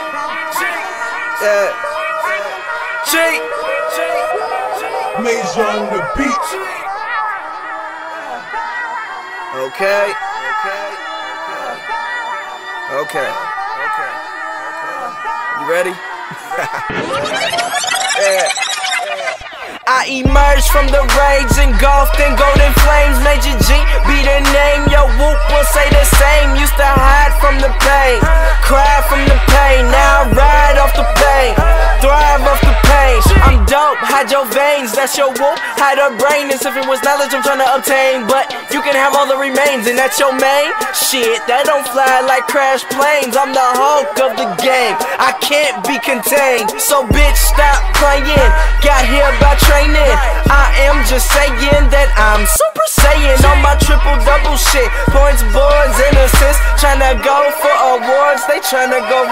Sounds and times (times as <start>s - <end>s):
Dance music: 0.0s - 59.3s
Pop music: 0.0s - 59.3s.